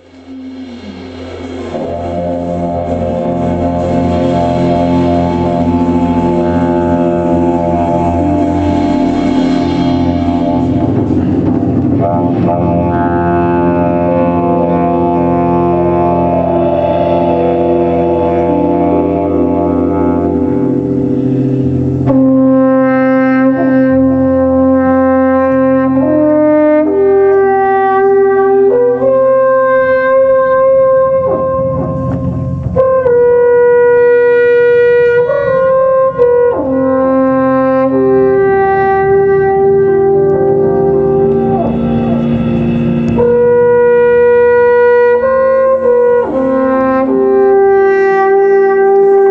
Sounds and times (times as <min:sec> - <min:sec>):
Wind instrument, woodwind instrument: 0:00.0 - 0:49.3.